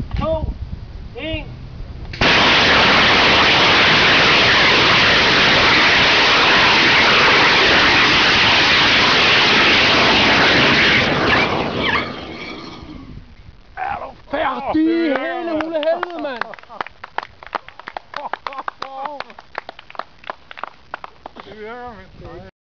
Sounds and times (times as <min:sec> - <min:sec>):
Speech: 0:01.2 - 0:01.5, 0:13.8 - 0:16.5, 0:21.4 - 0:22.5.